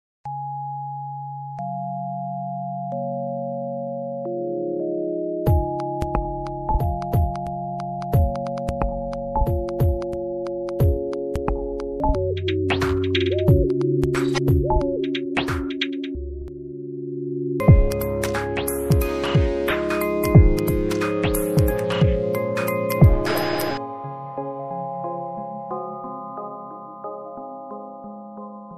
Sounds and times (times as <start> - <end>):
Music: 0.2 - 28.7.